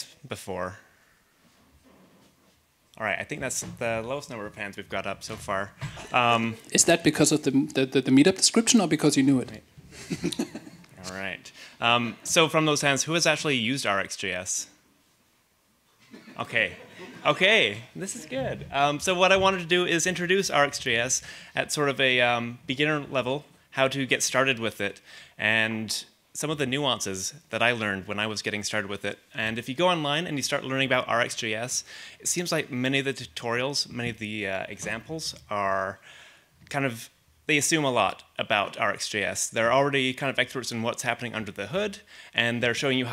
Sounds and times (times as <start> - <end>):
Speech: 0.0 - 0.8, 3.0 - 9.7, 11.0 - 14.8, 16.4 - 36.0, 36.7 - 43.1.